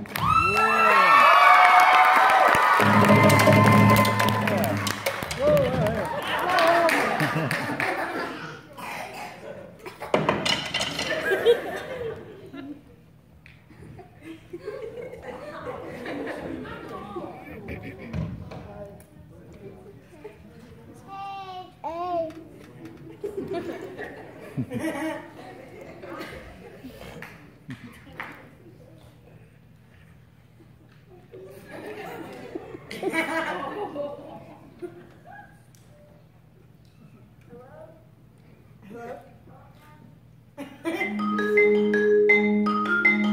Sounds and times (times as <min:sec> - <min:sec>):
Laughter: 0:06.0 - 0:08.6, 0:09.5 - 0:10.3, 0:10.9 - 0:13.0, 0:13.7 - 0:18.3, 0:23.0 - 0:27.1, 0:30.6 - 0:35.6, 0:40.6 - 0:41.2.